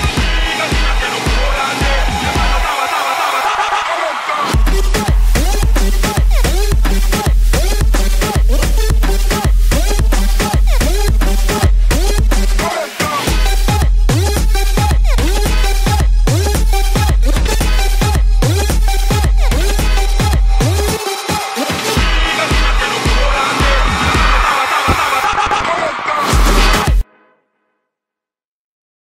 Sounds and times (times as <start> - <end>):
Disco: 0.0 - 27.0.